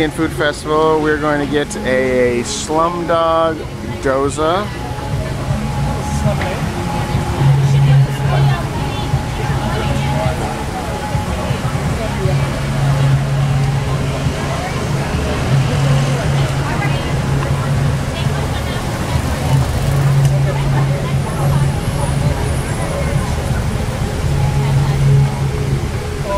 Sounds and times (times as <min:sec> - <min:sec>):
Vehicle: 0:00.0 - 0:26.3.